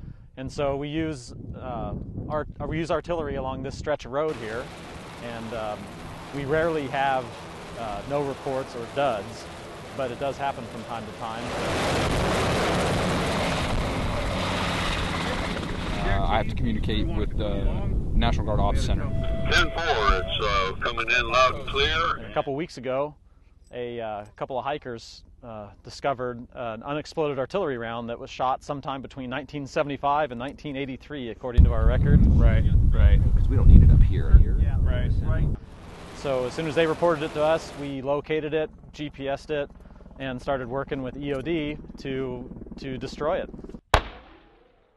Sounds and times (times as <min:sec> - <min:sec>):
Speech: 0:00.4 - 0:09.4, 0:10.0 - 0:11.5, 0:15.9 - 0:35.6, 0:36.2 - 0:43.5.